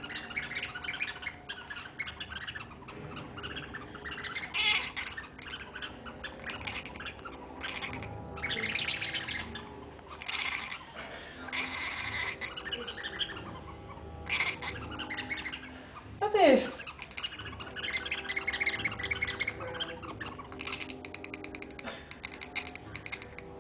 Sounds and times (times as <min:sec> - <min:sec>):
Speech: 0:16.2 - 0:16.8.